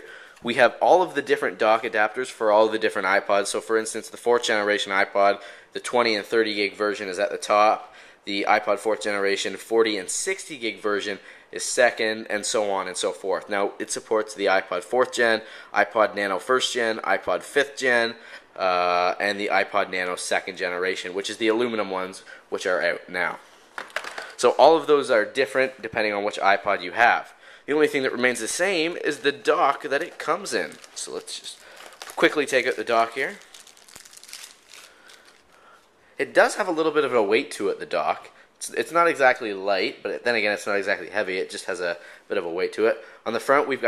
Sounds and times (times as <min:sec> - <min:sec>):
Speech: 0:00.0 - 0:23.4, 0:24.4 - 0:33.4, 0:36.2 - 0:43.8.